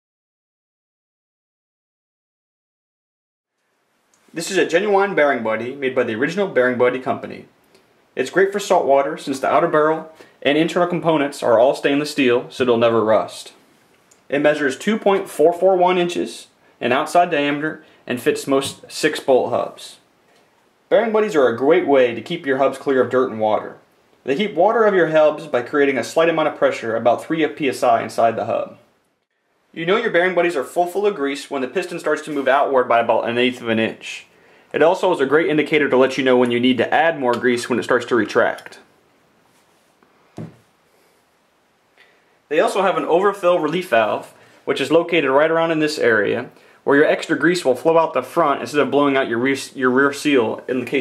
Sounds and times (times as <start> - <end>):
Speech: 4.3 - 7.5, 8.2 - 13.6, 14.3 - 20.1, 20.9 - 28.9, 29.7 - 38.9, 42.5 - 51.0.